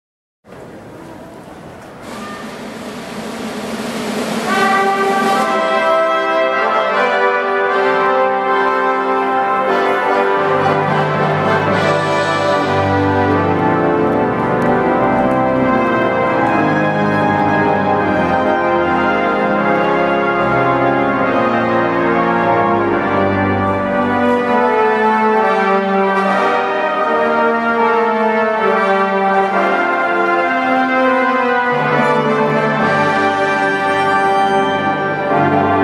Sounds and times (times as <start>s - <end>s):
Musical instrument: 2.4s - 35.8s
Classical music: 4.3s - 35.8s.